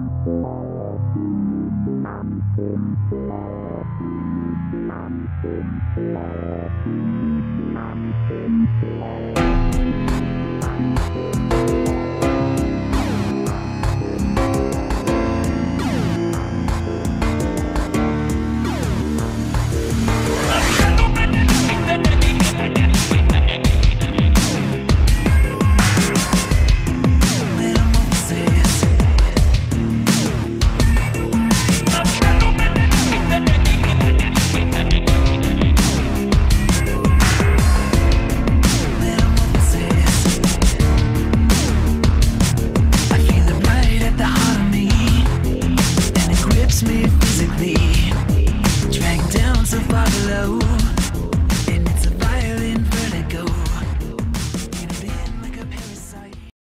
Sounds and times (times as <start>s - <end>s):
Drum and bass: 0.0s - 56.5s.